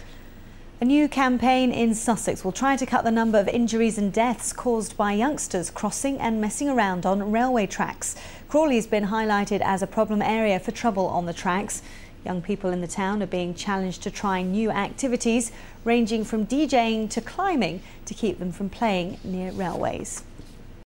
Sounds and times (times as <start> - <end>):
Speech: 0.8 - 20.2.